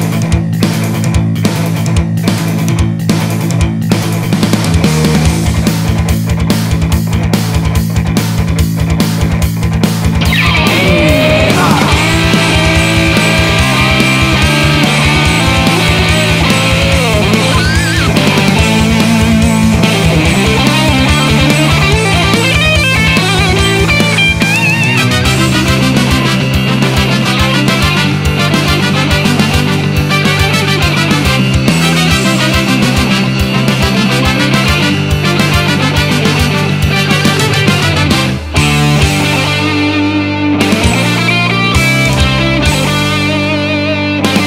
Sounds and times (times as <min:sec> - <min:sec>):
Video game music: 0:09.9 - 0:44.4.